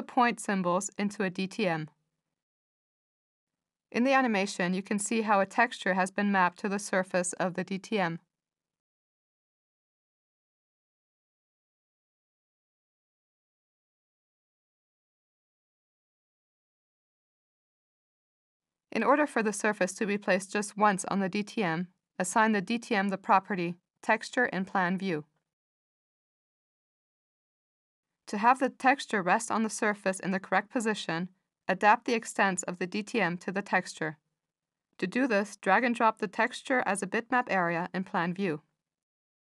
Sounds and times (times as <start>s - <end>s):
Narration, monologue: 0.0s - 2.4s, 3.9s - 8.4s, 18.9s - 25.5s, 28.3s - 38.8s.